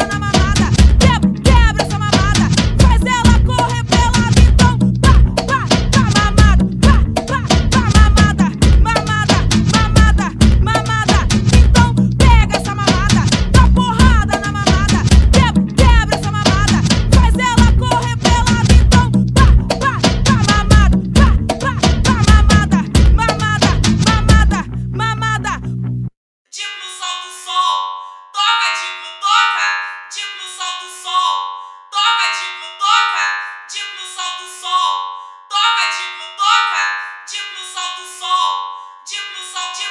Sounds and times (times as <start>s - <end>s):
Music: 0.0s - 39.9s.